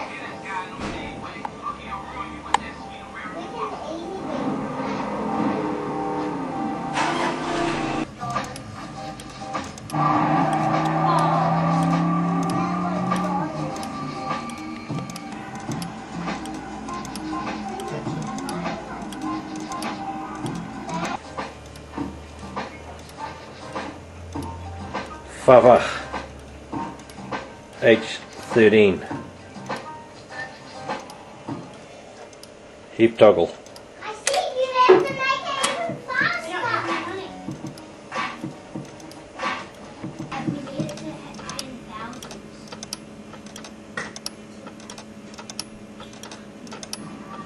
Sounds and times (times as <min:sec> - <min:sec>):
Tick-tock: 0:08.2 - 0:25.2, 0:26.1 - 0:28.6, 0:29.6 - 0:32.6, 0:36.9 - 0:47.4.